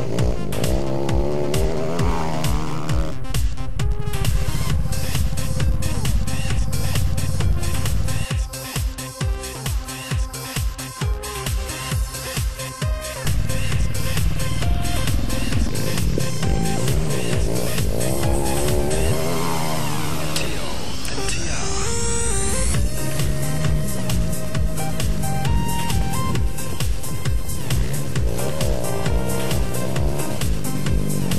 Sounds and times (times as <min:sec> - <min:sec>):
Music: 0:00.0 - 0:31.3.